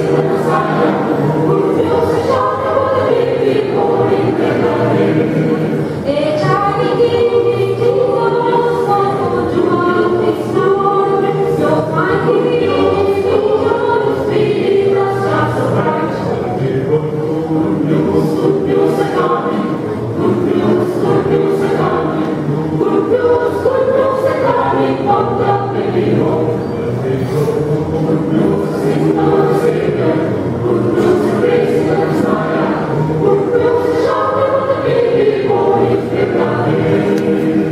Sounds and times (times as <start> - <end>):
Choir: 0.0 - 37.7
Christian music: 0.0 - 37.7
Christmas music: 0.0 - 37.7.